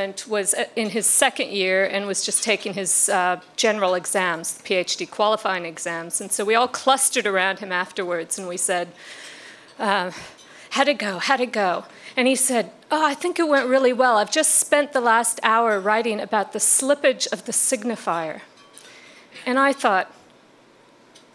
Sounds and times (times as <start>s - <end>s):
Speech: 0.0s - 8.9s, 9.8s - 18.5s, 19.4s - 20.2s.